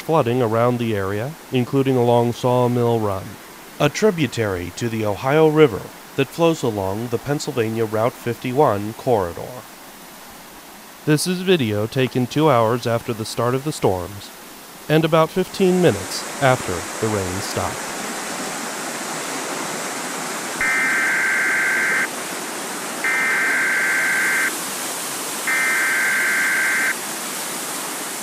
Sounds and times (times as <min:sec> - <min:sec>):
Speech: 0:00.0 - 0:09.7, 0:11.1 - 0:17.8
Stream: 0:00.0 - 0:28.2.